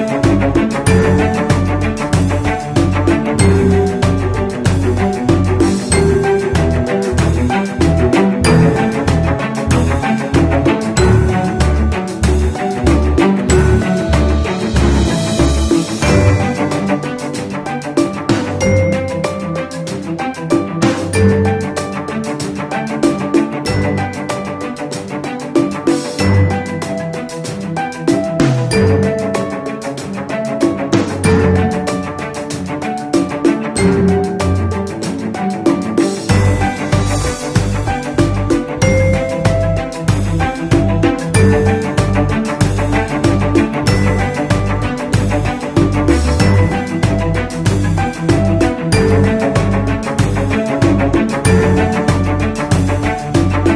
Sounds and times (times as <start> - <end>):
Music: 0.0 - 53.7.